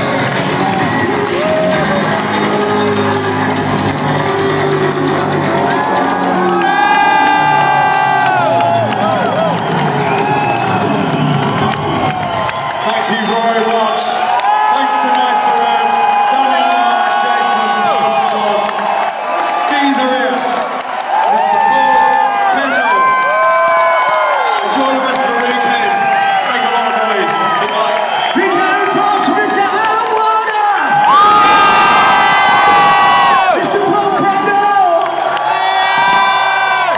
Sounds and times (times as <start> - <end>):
Inside, large room or hall: 0.0 - 36.9
Speech: 12.8 - 18.8, 19.4 - 20.6, 21.3 - 23.1, 24.6 - 31.0, 33.6 - 35.0.